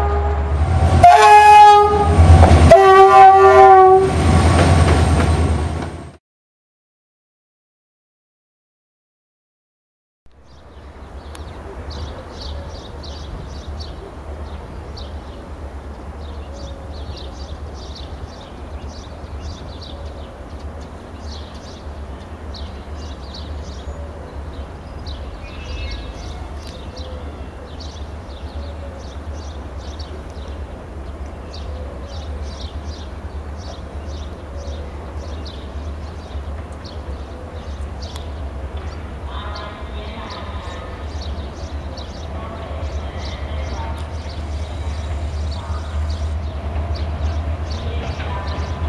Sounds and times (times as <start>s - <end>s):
Outside, rural or natural: 0.0s - 6.2s, 10.3s - 48.8s
Train: 0.0s - 6.2s, 10.3s - 48.8s.